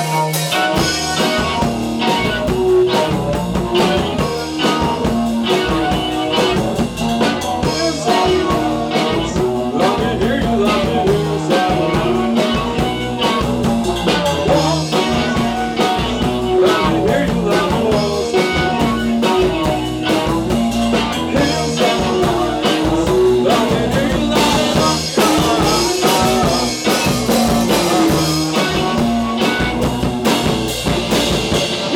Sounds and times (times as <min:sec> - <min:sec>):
Grunge: 0:00.0 - 0:31.9
Punk rock: 0:00.0 - 0:31.9.